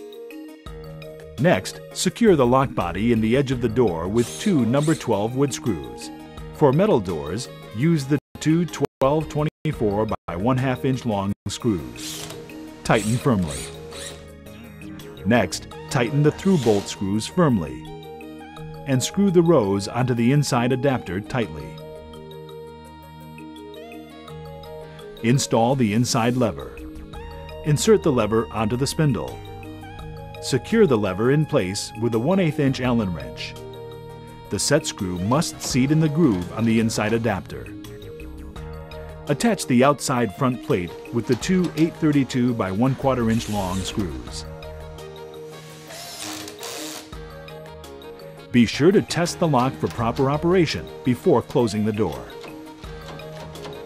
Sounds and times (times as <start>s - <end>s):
Music: 0.0s - 53.8s
Speech: 1.4s - 12.0s, 12.8s - 13.7s, 15.2s - 17.8s, 18.9s - 21.8s, 25.2s - 26.8s, 27.6s - 29.4s, 30.4s - 33.6s, 34.5s - 37.7s, 39.3s - 44.5s, 48.6s - 52.4s.